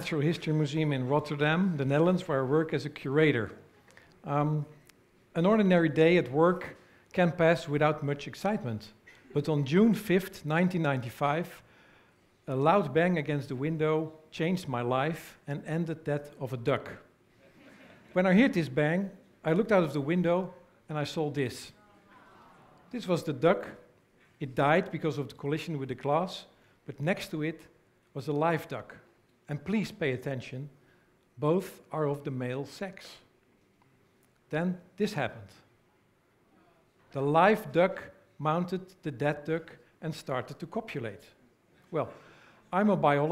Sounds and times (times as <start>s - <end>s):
Speech: 0.0s - 3.6s, 4.2s - 4.8s, 5.4s - 11.6s, 12.5s - 17.1s, 18.2s - 30.7s, 31.4s - 33.3s, 34.5s - 35.6s, 37.1s - 43.3s.